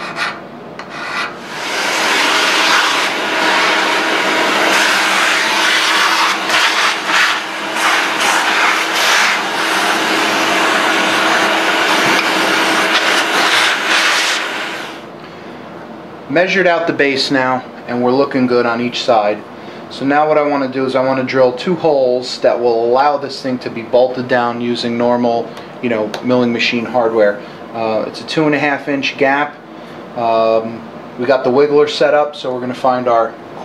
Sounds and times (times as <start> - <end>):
Power tool: 1.4 - 15.1.